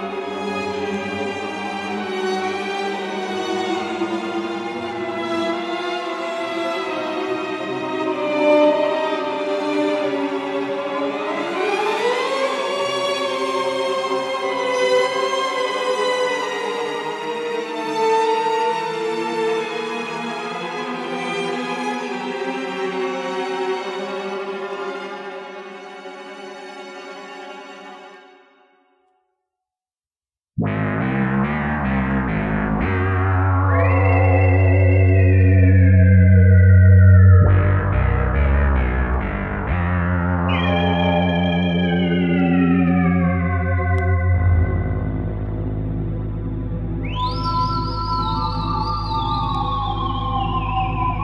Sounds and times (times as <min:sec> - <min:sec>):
Music: 0:00.0 - 0:29.6, 0:30.6 - 0:51.2.